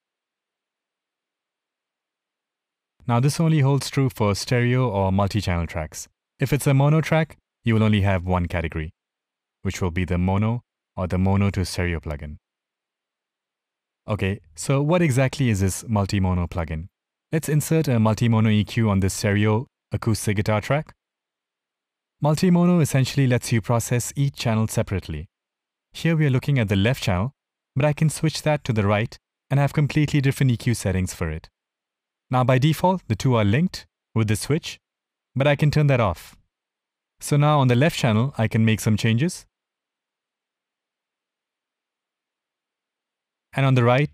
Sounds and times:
Speech: 0:03.0 - 0:09.0, 0:09.6 - 0:12.4, 0:14.1 - 0:21.0, 0:22.2 - 0:25.3, 0:26.0 - 0:31.6, 0:32.3 - 0:34.8, 0:35.4 - 0:36.4, 0:37.2 - 0:39.5, 0:43.6 - 0:44.1.

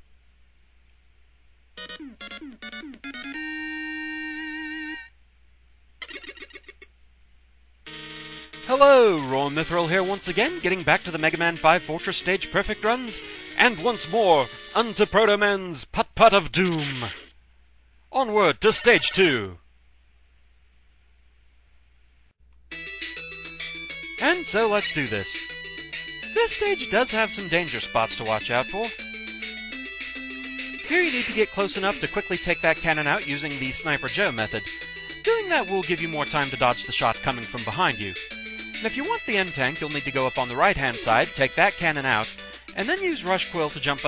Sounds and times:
Music: 0:01.8 - 0:05.1, 0:07.9 - 0:15.4, 0:22.7 - 0:44.0
Speech: 0:08.7 - 0:17.2, 0:18.1 - 0:19.6, 0:24.2 - 0:25.4, 0:26.4 - 0:28.9, 0:30.9 - 0:34.7, 0:35.3 - 0:38.2, 0:38.8 - 0:44.0.

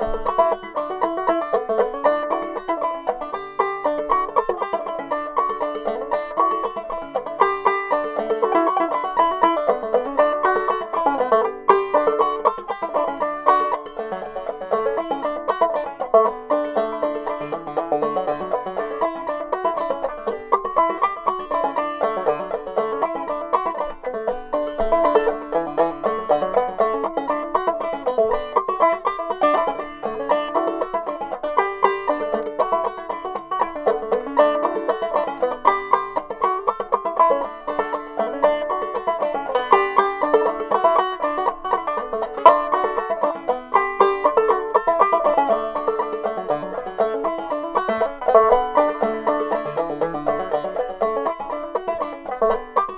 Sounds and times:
Music: 0:00.0 - 0:52.9.

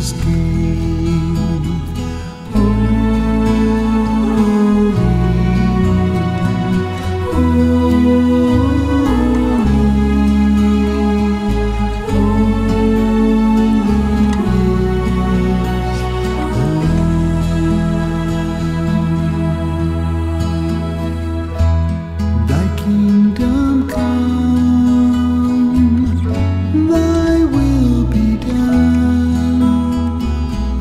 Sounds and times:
Gospel music: 0:00.0 - 0:30.8.

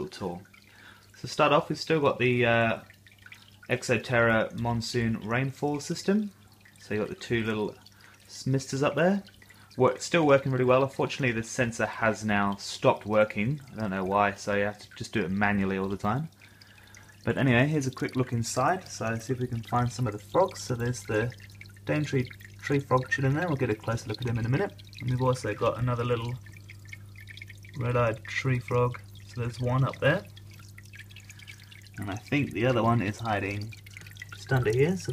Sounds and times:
Speech: 0:00.0 - 0:00.5, 0:01.2 - 0:02.9, 0:03.7 - 0:16.3, 0:17.3 - 0:26.4, 0:27.8 - 0:30.3, 0:32.0 - 0:33.8, 0:34.4 - 0:35.1.

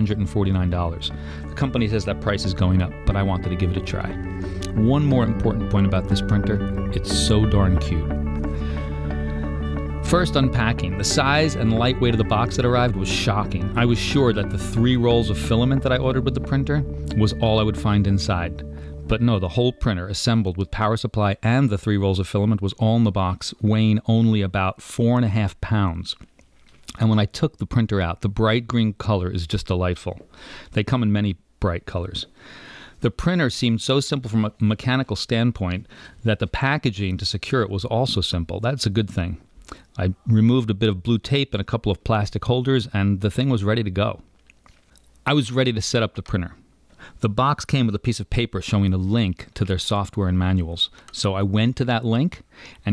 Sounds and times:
Speech: 0:00.0 - 0:08.2, 0:10.0 - 0:26.2, 0:26.9 - 0:32.3, 0:33.0 - 0:44.2, 0:45.2 - 0:46.6, 0:47.2 - 0:52.9
Music: 0:00.0 - 0:21.0.

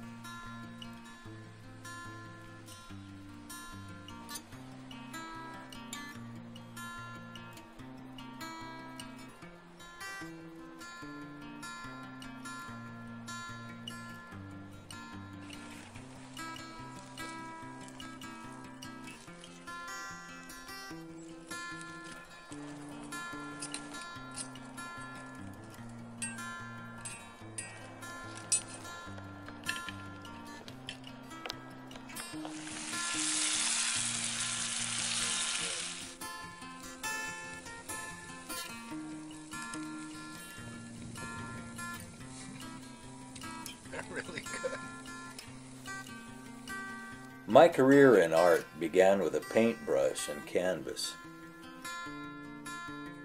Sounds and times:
Music: 0:00.0 - 0:53.2.

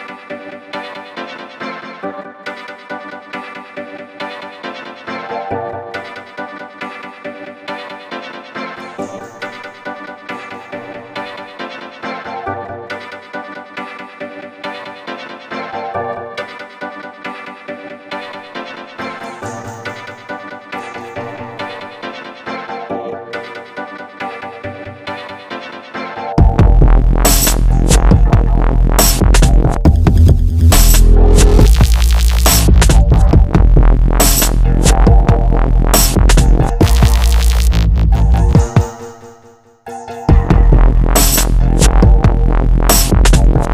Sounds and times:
Electronic music: 0:00.0 - 0:43.7.

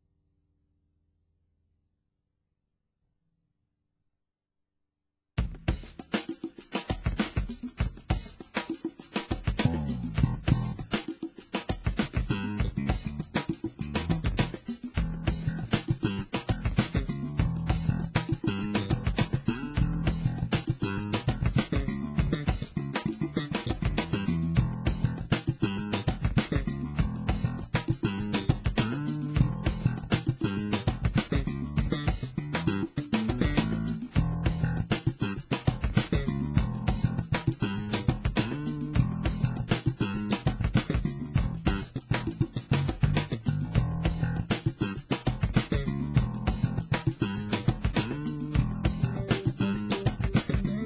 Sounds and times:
Bass guitar: 0:09.4 - 0:11.1, 0:11.8 - 0:50.8.

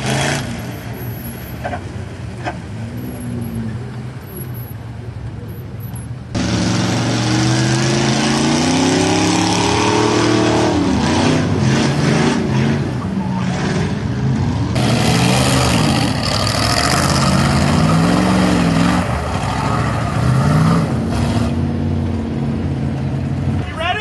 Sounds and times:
Car: 0:00.0 - 0:24.0.

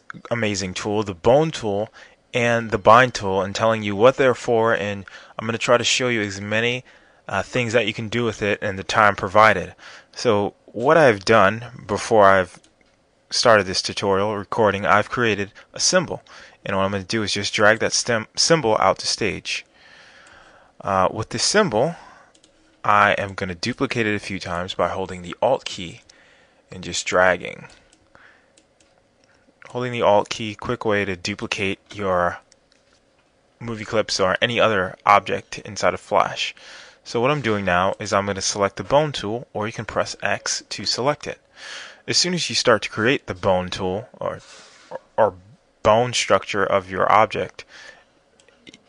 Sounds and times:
Speech: 0:00.1 - 0:12.6, 0:13.3 - 0:19.7, 0:20.8 - 0:22.1, 0:22.9 - 0:26.1, 0:26.7 - 0:27.8, 0:29.6 - 0:32.5, 0:33.6 - 0:41.4, 0:42.1 - 0:47.7.

